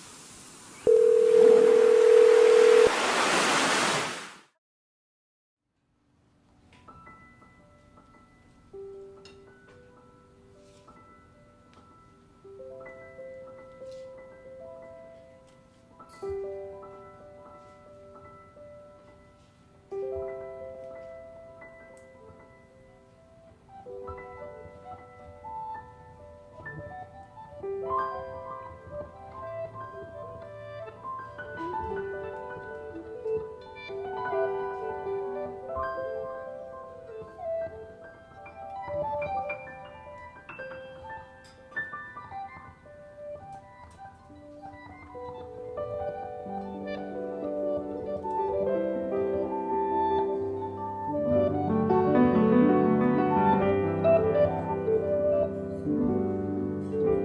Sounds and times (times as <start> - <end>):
Music: 6.2 - 57.2.